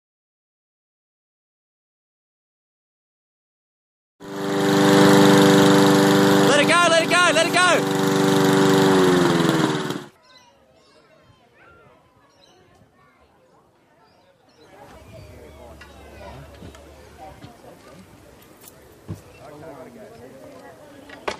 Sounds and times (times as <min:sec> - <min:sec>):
Lawn mower: 0:04.2 - 0:10.2, 0:14.8 - 0:19.6.